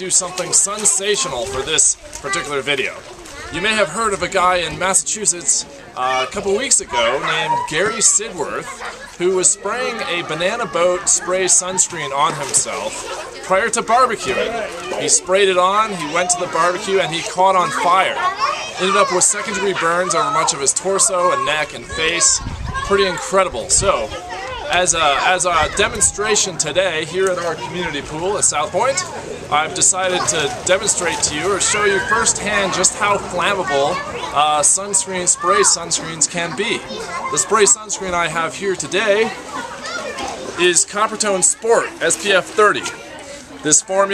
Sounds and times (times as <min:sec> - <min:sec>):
Speech: 0:00.0 - 0:44.1.